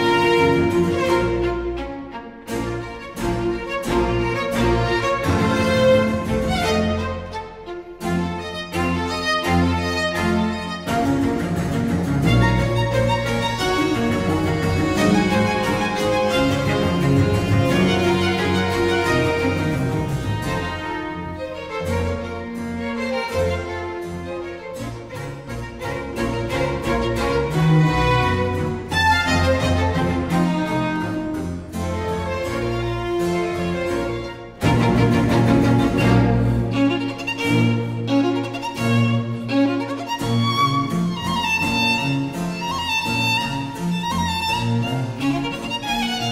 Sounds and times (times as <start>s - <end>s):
Violin, fiddle: 0.0s - 46.3s.